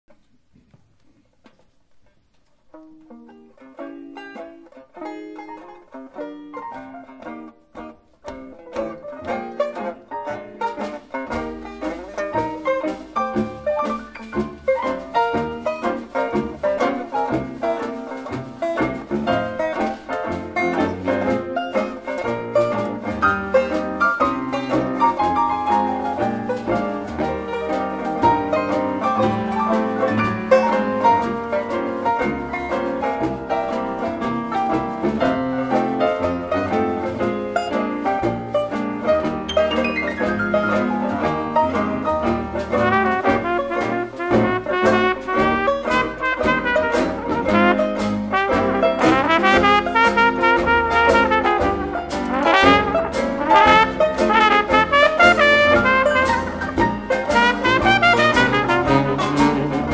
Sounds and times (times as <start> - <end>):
Mandolin: 0.1 - 59.9.